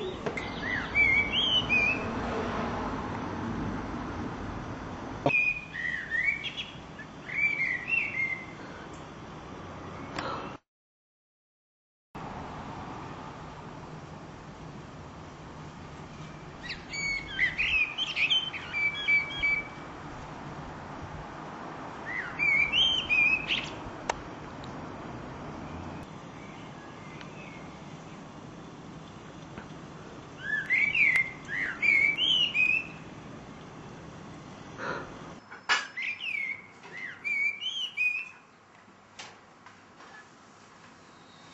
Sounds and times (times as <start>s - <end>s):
Bird: 0.0s - 2.1s, 5.2s - 8.6s, 16.3s - 19.8s, 22.1s - 23.8s, 30.4s - 33.0s, 35.4s - 38.6s.